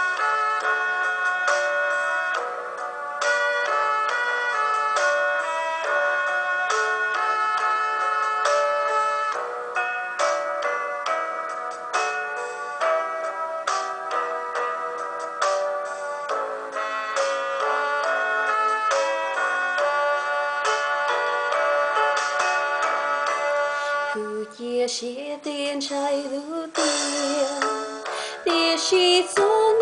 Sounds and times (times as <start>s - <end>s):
Music: 0.0s - 29.8s.